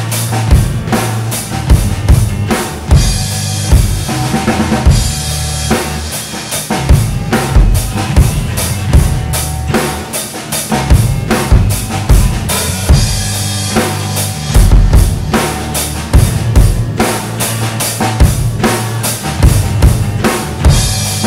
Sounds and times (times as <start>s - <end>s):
Bass drum: 0.0s - 21.2s
Drum kit: 0.0s - 21.2s.